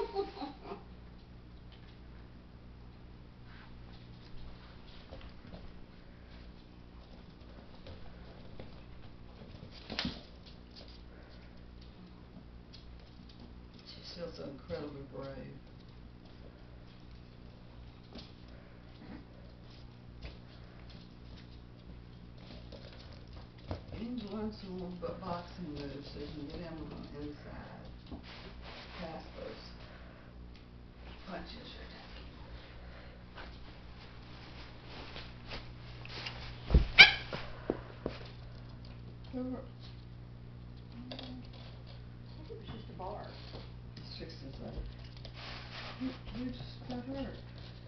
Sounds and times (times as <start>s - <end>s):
Speech: 13.8s - 15.6s, 24.0s - 27.9s, 29.0s - 29.8s, 31.2s - 32.1s, 39.3s - 39.7s, 42.3s - 44.9s, 46.0s - 47.5s
Domestic animals, pets: 37.0s - 37.5s.